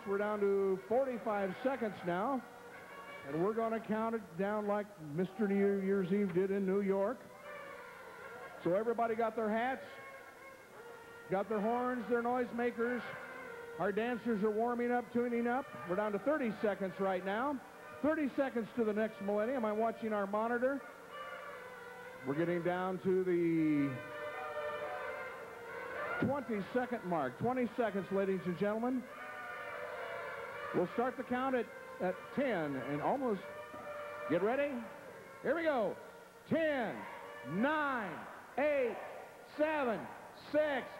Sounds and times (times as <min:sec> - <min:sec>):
Speech: 0:00.0 - 0:02.5, 0:03.3 - 0:07.2, 0:08.6 - 0:10.0, 0:11.3 - 0:13.2, 0:13.8 - 0:20.8, 0:22.2 - 0:24.0, 0:26.2 - 0:29.1, 0:30.7 - 0:33.5, 0:34.3 - 0:40.9
Music: 0:00.0 - 0:39.5.